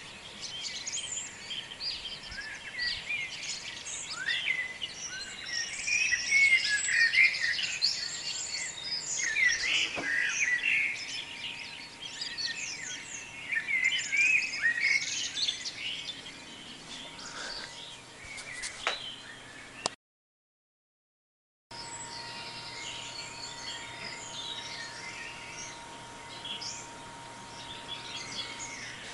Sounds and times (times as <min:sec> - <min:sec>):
Bird vocalization, bird call, bird song: 0:00.0 - 0:20.0, 0:21.8 - 0:29.1.